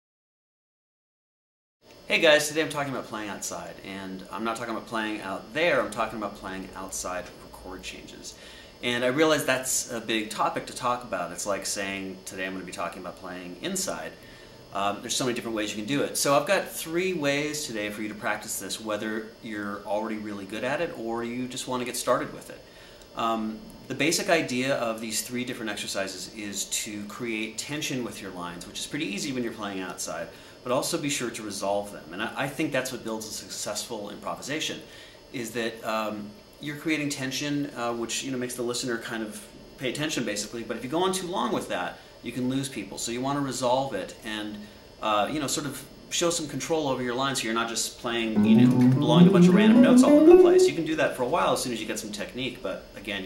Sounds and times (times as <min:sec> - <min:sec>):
Speech: 0:02.1 - 0:53.2.